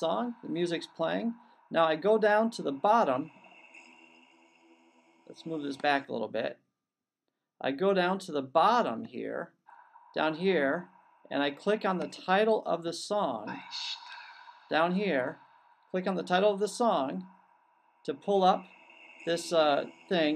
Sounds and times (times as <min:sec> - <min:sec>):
Speech: 0:00.0 - 0:03.3, 0:05.3 - 0:06.6, 0:07.6 - 0:09.5, 0:10.2 - 0:15.4, 0:16.0 - 0:17.2, 0:18.1 - 0:20.3.